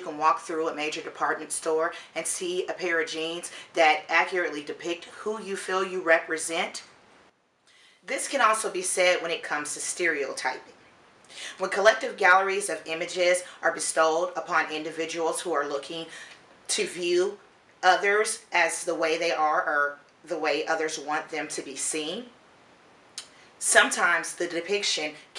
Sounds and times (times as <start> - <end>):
Speech: 0.0 - 6.9, 8.1 - 10.7, 11.4 - 22.4, 23.6 - 25.3.